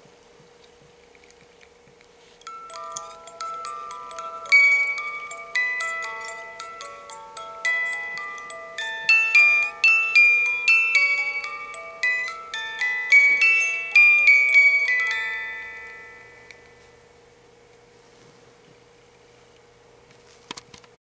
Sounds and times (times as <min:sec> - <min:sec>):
Music: 0:02.4 - 0:16.9.